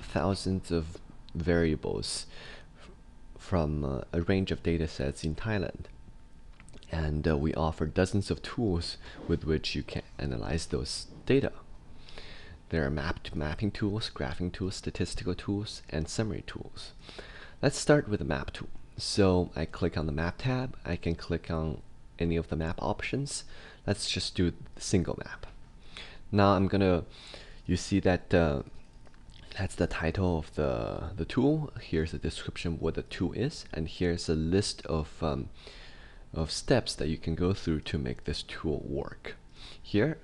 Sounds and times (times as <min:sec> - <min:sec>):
Speech: 0:00.0 - 0:02.4, 0:03.4 - 0:06.0, 0:06.8 - 0:11.7, 0:12.7 - 0:17.0, 0:17.6 - 0:25.6, 0:26.3 - 0:27.1, 0:27.7 - 0:28.8, 0:29.4 - 0:35.6, 0:36.3 - 0:40.2.